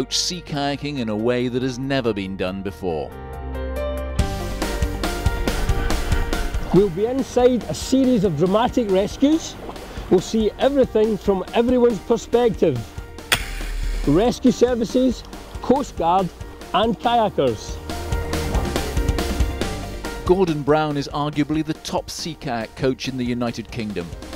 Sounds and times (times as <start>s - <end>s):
Speech: 0.0s - 3.2s, 6.7s - 12.9s, 14.1s - 17.8s, 20.2s - 24.2s
Music: 0.0s - 24.3s.